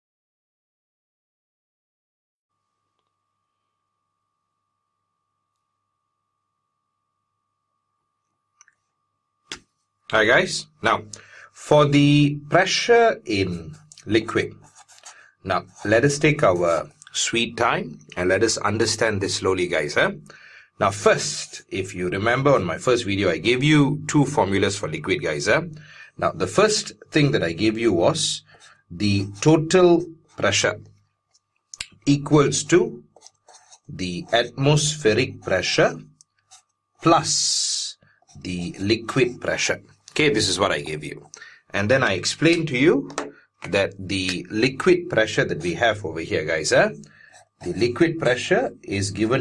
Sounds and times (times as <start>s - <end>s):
Speech: 10.1s - 14.7s, 15.4s - 30.9s, 31.8s - 33.0s, 33.9s - 36.1s, 37.0s - 49.4s.